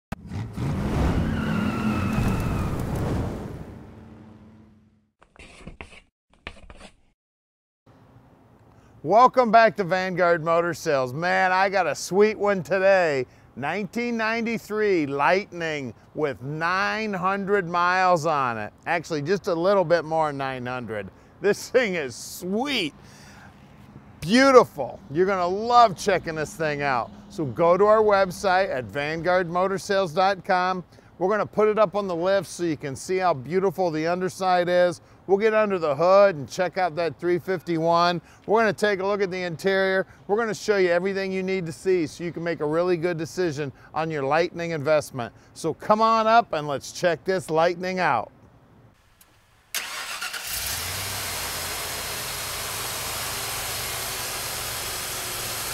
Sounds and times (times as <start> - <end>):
Engine: 0.1 - 2.6, 49.2 - 55.7
Tire squeal: 0.2 - 3.0
Speech: 9.1 - 22.9, 24.2 - 48.3.